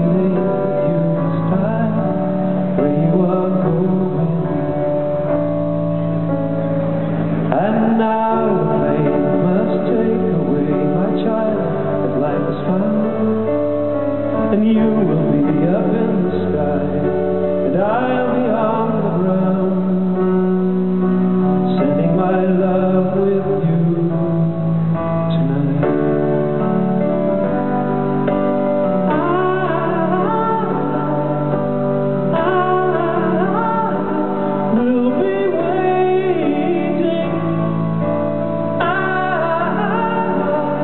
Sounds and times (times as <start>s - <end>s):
Male singing: 0.0s - 5.2s, 7.5s - 20.7s, 21.6s - 26.9s, 29.1s - 31.6s, 32.2s - 40.8s
Music: 0.0s - 40.8s.